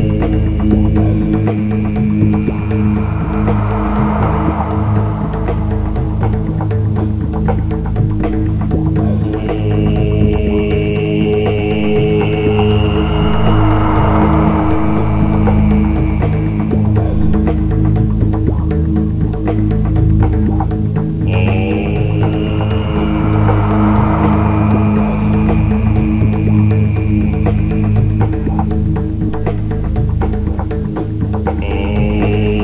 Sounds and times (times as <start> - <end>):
Mantra: 0.0 - 5.7, 9.0 - 17.7, 21.2 - 28.8, 31.5 - 32.6.